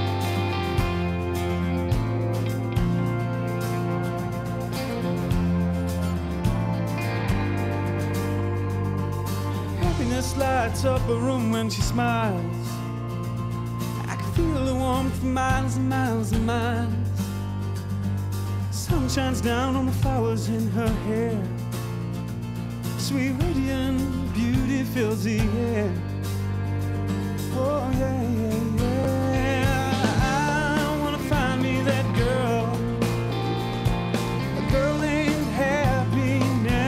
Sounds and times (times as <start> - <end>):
Sad music: 0.0 - 16.1, 26.0 - 36.8.